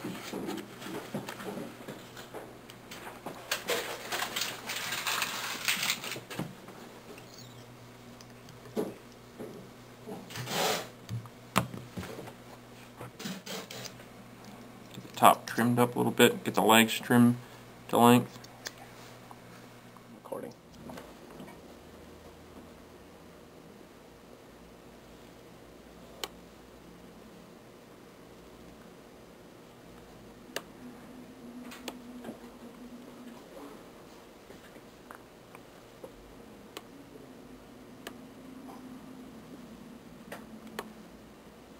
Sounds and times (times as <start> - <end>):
Speech: 15.0 - 18.4, 20.2 - 20.6.